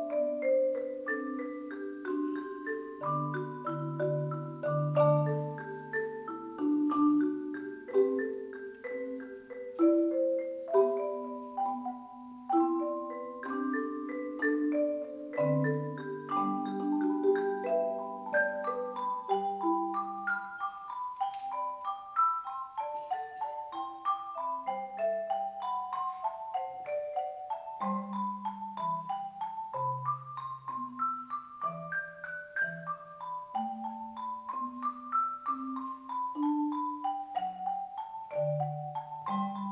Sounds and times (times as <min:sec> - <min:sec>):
Marimba, xylophone: 0:00.0 - 0:39.7
Vibraphone: 0:00.0 - 0:39.7.